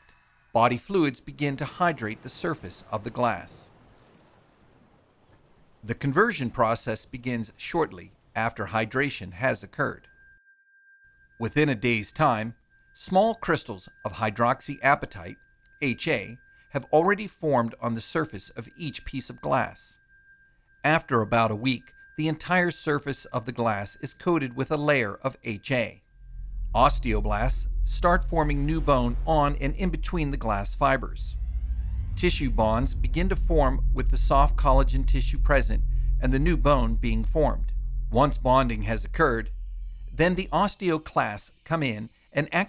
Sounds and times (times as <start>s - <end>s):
Speech: 0.6s - 3.7s, 5.8s - 10.0s, 11.4s - 20.0s, 20.9s - 26.0s, 26.8s - 31.4s, 32.2s - 39.5s, 40.2s - 42.6s.